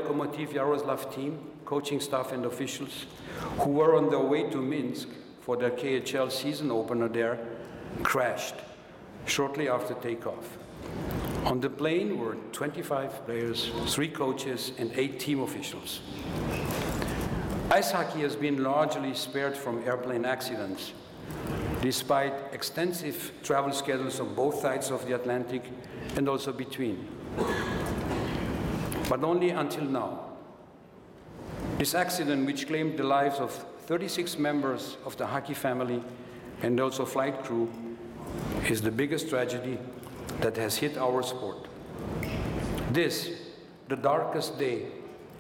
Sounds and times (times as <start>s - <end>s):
Male speech, man speaking: 0.0s - 8.7s, 9.3s - 10.6s, 11.4s - 16.1s, 17.7s - 21.0s, 21.8s - 27.1s, 29.1s - 30.3s, 31.8s - 37.8s, 38.6s - 41.7s, 42.9s - 45.0s
Narration, monologue: 0.0s - 45.4s.